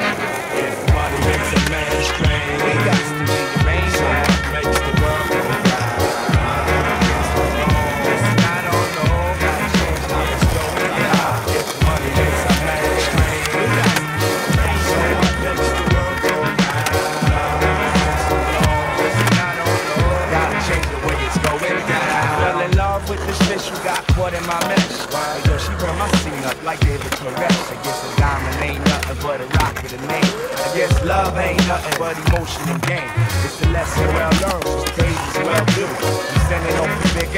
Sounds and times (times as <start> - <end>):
Music: 0.0 - 37.3.